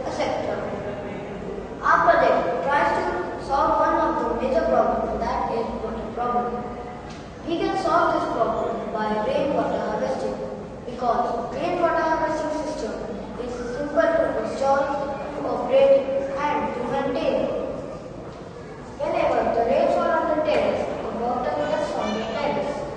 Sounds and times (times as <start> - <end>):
Speech: 0.0 - 6.8, 7.4 - 17.9, 18.6 - 22.9.